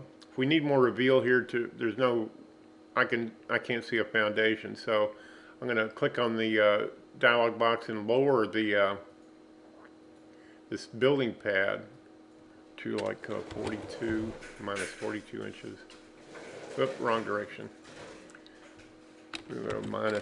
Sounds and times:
Speech: 0:00.0 - 0:02.4, 0:03.0 - 0:09.1, 0:10.7 - 0:12.0, 0:12.8 - 0:15.9, 0:16.7 - 0:17.8, 0:19.4 - 0:20.2.

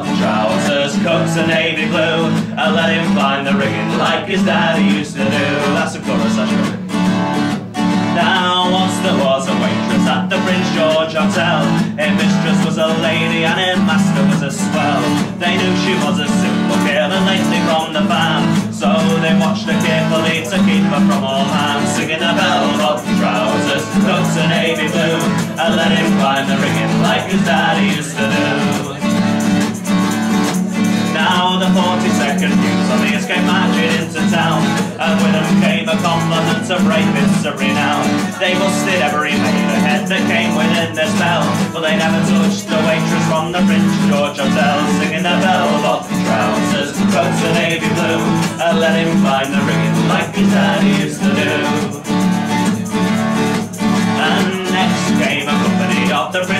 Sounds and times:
Music: 0:00.0 - 0:56.5.

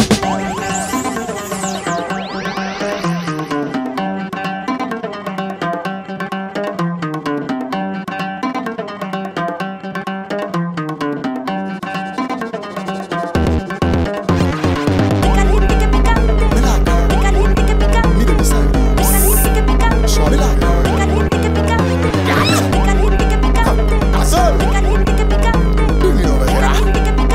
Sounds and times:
Music: 0:00.0 - 0:27.3.

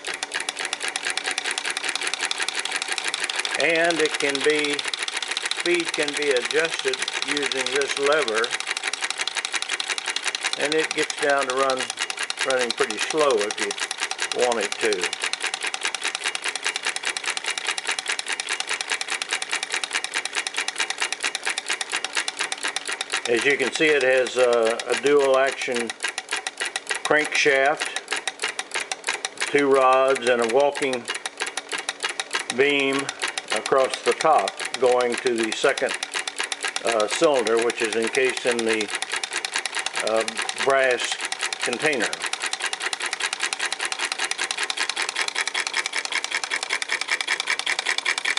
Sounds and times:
Engine: 0:00.0 - 0:48.3
Speech: 0:03.6 - 0:04.8, 0:05.6 - 0:08.5, 0:10.6 - 0:13.8, 0:14.4 - 0:15.1, 0:23.3 - 0:25.9, 0:27.1 - 0:28.0, 0:29.5 - 0:31.1, 0:32.5 - 0:35.9, 0:36.8 - 0:38.9, 0:40.0 - 0:42.2.

